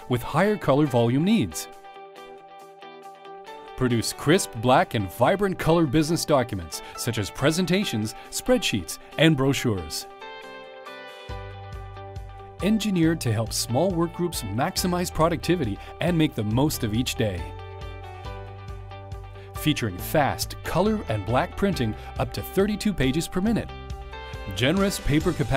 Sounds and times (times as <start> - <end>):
Music: 0.0 - 25.5
Speech: 0.1 - 1.7, 3.8 - 10.1, 12.6 - 17.5, 19.6 - 23.7, 24.5 - 25.5.